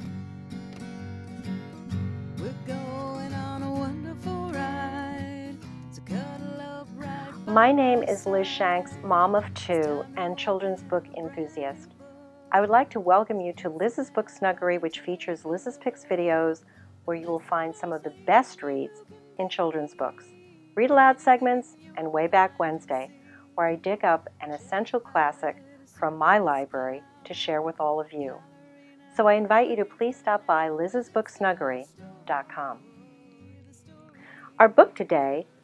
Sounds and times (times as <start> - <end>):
Speech: 7.5 - 11.9, 12.6 - 20.2, 20.8 - 28.4, 29.2 - 32.8, 34.6 - 35.4.